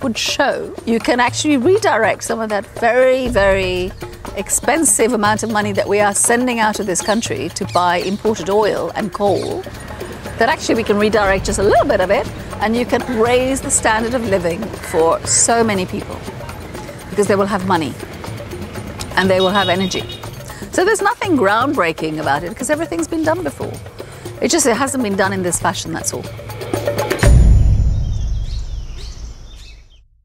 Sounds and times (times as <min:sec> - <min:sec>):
Speech: 0:00.0 - 0:09.6, 0:10.4 - 0:16.2, 0:17.2 - 0:18.0, 0:19.2 - 0:20.1, 0:20.7 - 0:23.8, 0:24.4 - 0:26.2
Music: 0:00.0 - 0:29.6
Outside, rural or natural: 0:00.0 - 0:30.2
Bird vocalization, bird call, bird song: 0:06.5 - 0:10.2, 0:19.3 - 0:20.6, 0:28.0 - 0:30.1.